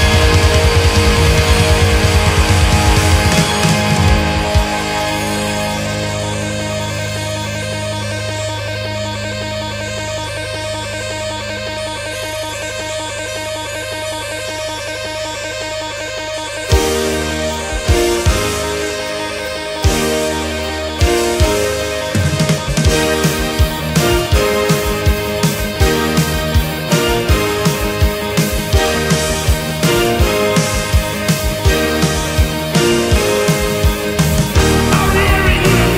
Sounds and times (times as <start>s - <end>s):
Heavy metal: 0.0s - 35.9s.